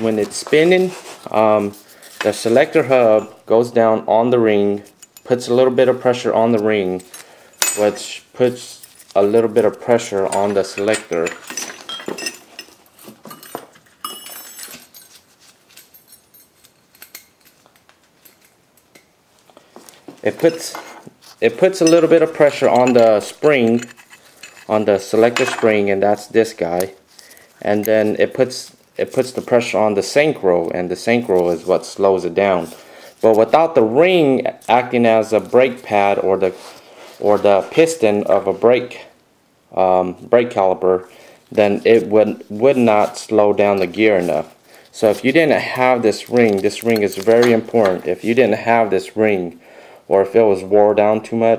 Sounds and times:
Speech: 0.0 - 7.1, 7.8 - 11.4, 20.2 - 23.9, 24.7 - 27.0, 27.6 - 36.6, 37.2 - 51.5.

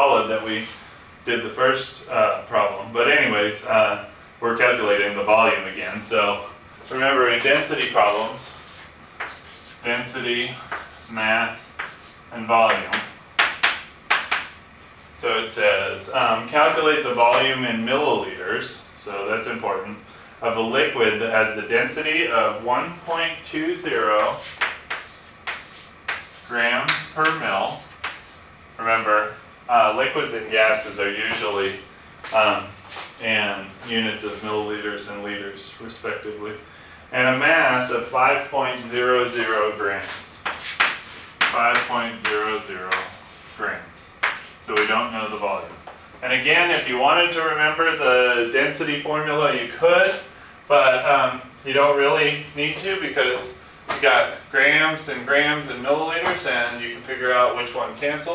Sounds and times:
Speech: 0.0 - 8.8, 9.8 - 13.2, 15.2 - 24.6, 26.4 - 27.9, 28.8 - 40.5, 41.4 - 58.3.

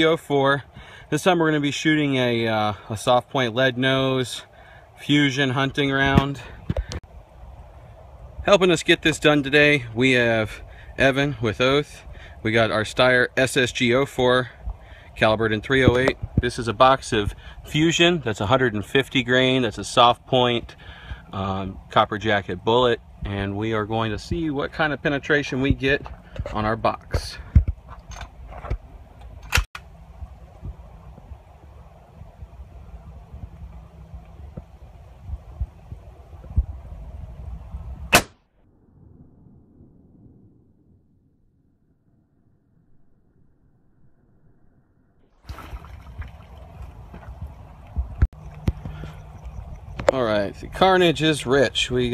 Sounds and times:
Speech: 0.0 - 6.5, 8.4 - 14.6, 15.2 - 27.5, 50.1 - 52.1.

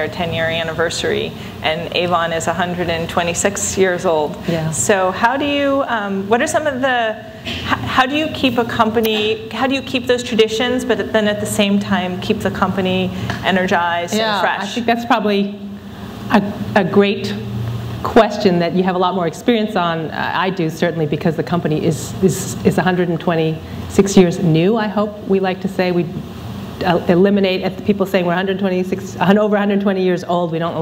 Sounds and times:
Female speech, woman speaking: 0.0 - 15.6, 16.3 - 26.2, 26.8 - 30.8
Conversation: 0.0 - 30.8.

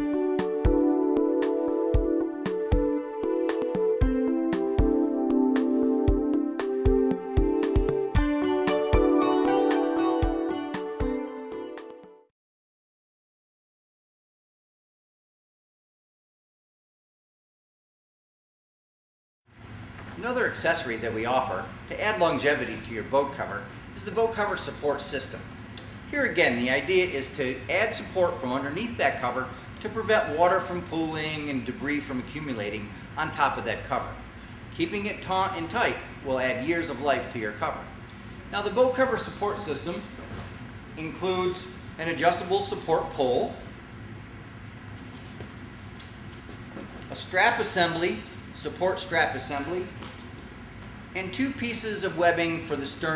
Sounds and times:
Speech: 20.2 - 25.5, 26.1 - 34.2, 34.8 - 37.9, 38.5 - 40.1, 41.0 - 43.7, 47.1 - 50.0, 51.2 - 53.1.

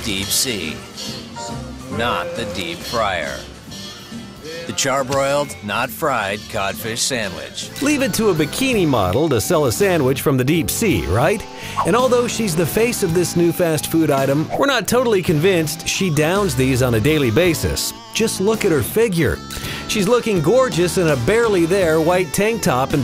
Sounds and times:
Speech: 0.0 - 0.8, 2.0 - 3.5, 4.5 - 23.0
Music: 0.0 - 23.0.

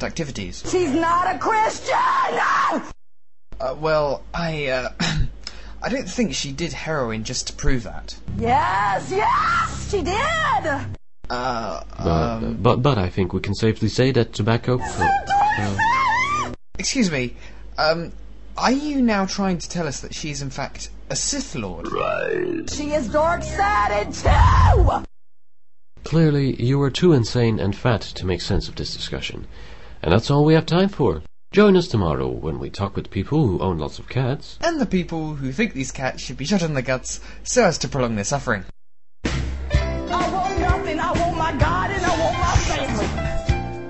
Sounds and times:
Speech: 0.0 - 1.9, 3.6 - 5.2, 5.8 - 9.3, 9.9 - 15.8, 16.8 - 25.0, 26.0 - 38.7.

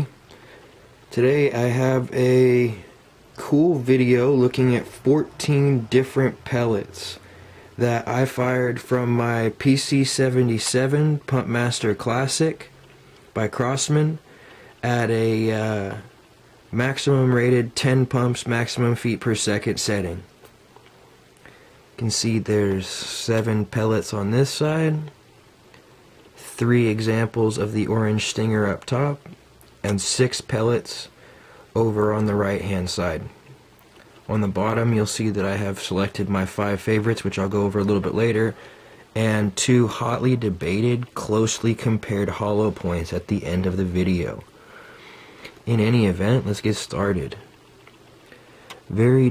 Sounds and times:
Speech: 1.1 - 20.4, 22.0 - 25.2, 26.4 - 33.5, 34.3 - 44.5, 45.6 - 47.6, 48.8 - 49.3.

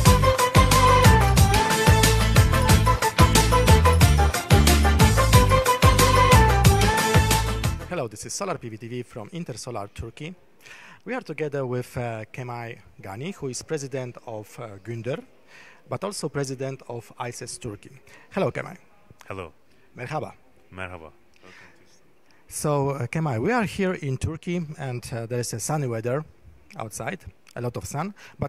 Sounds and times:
Music: 0.0 - 8.0
Speech: 7.9 - 10.4, 11.1 - 15.3, 15.9 - 21.2, 22.5 - 28.4.

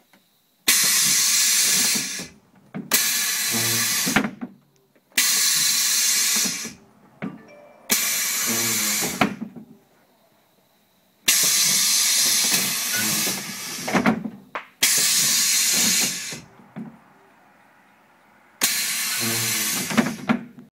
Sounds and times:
Sliding door: 3.0 - 4.4, 5.2 - 9.6, 11.4 - 14.3, 14.9 - 17.1, 18.6 - 20.5
Vehicle: 5.2 - 10.4, 14.8 - 20.6.

